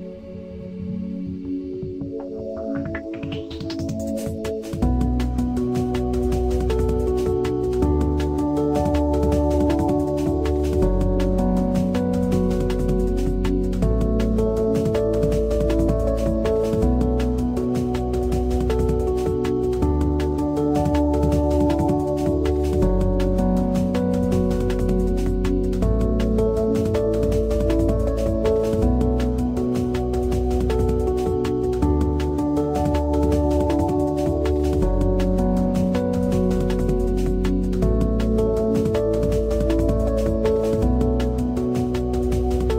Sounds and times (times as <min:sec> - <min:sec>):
Music: 0:00.0 - 0:42.7.